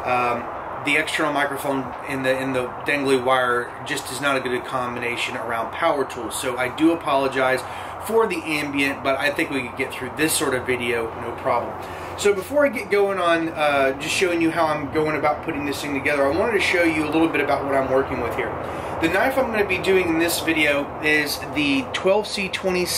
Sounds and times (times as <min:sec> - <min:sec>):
Speech: 0:00.0 - 0:22.9.